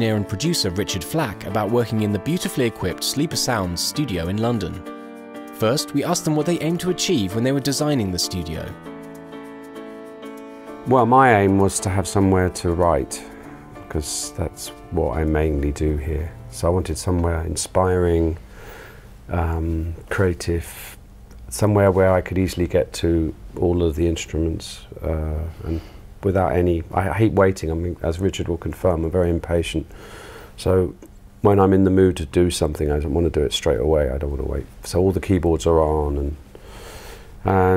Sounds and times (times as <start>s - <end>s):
Speech: 0.0s - 4.8s, 5.6s - 8.8s, 10.8s - 13.3s, 13.9s - 18.4s, 19.3s - 29.9s, 30.6s - 36.4s, 37.4s - 37.7s
Music: 0.0s - 20.4s, 35.7s - 37.7s.